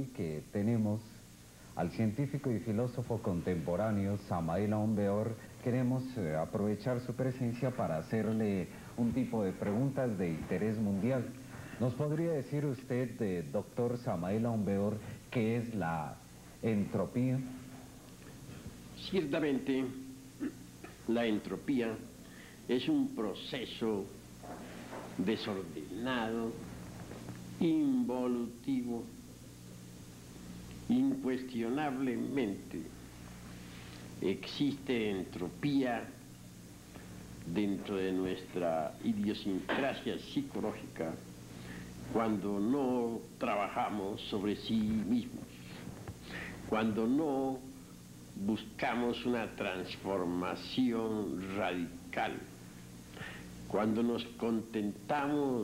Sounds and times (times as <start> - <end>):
Speech: 0.0 - 1.2, 1.8 - 17.7, 19.0 - 22.1, 22.7 - 24.2, 25.1 - 26.7, 27.6 - 29.2, 30.9 - 33.0, 34.2 - 36.3, 37.4 - 41.3, 42.1 - 45.9, 46.7 - 47.8, 48.4 - 52.6, 53.7 - 55.6.